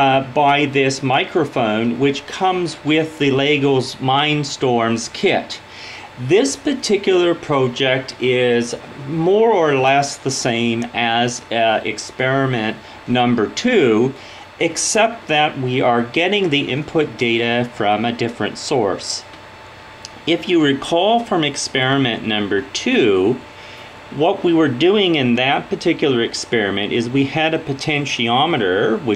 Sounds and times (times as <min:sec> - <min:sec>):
Speech: 0:00.0 - 0:19.3, 0:20.1 - 0:23.5, 0:24.1 - 0:29.1.